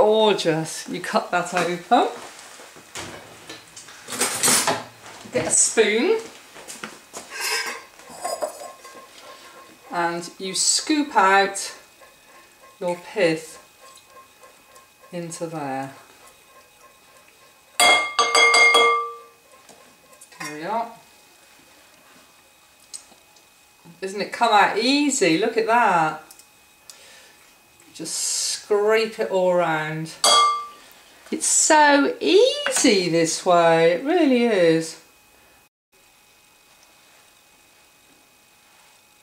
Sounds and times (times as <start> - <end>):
Dishes, pots, and pans: 7.4 - 9.0, 17.8 - 19.3, 30.2 - 30.8.